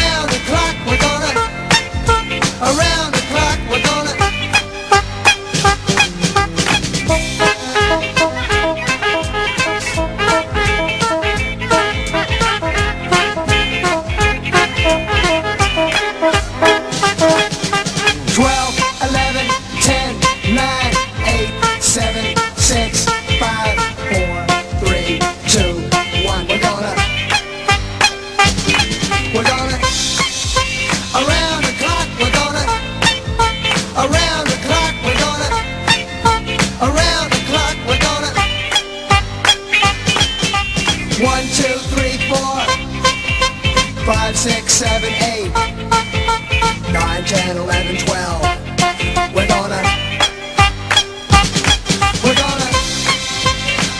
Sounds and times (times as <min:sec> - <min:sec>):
Music: 0:00.0 - 0:53.9.